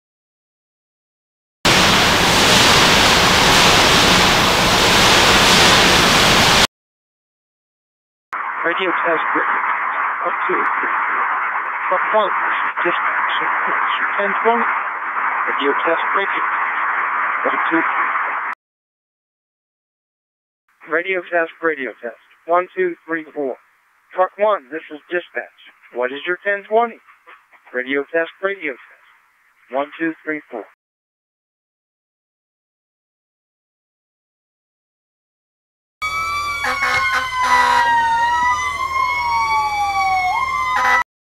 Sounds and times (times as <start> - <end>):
Speech: 8.6 - 11.2, 11.9 - 14.7, 15.5 - 16.6, 17.4 - 18.1, 20.8 - 23.6, 24.2 - 27.0, 27.7 - 28.9, 29.7 - 30.8.